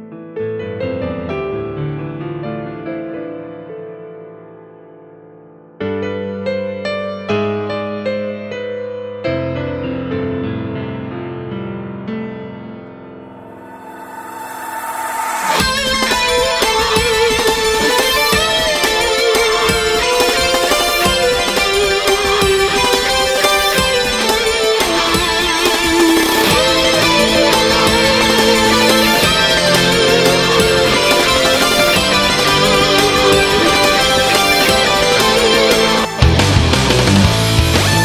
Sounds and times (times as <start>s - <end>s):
Music: 0.0s - 38.0s.